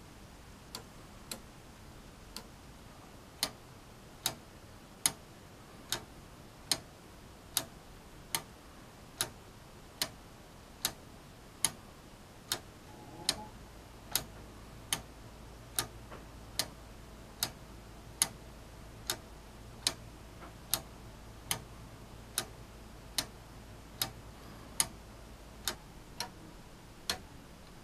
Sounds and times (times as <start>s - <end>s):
Tick-tock: 0.7s - 1.5s, 2.3s - 2.5s, 3.4s - 3.6s, 4.2s - 4.4s, 5.0s - 5.2s, 5.9s - 6.1s, 6.7s - 6.9s, 7.5s - 8.5s, 9.2s - 9.4s, 10.0s - 10.2s, 12.5s - 13.5s, 14.1s - 15.1s, 15.7s - 16.8s, 17.4s - 17.6s, 18.2s - 18.4s, 19.0s - 20.9s, 21.5s - 21.7s, 22.3s - 23.4s, 24.0s - 24.2s, 24.8s - 25.0s, 25.6s - 26.4s, 27.1s - 27.8s.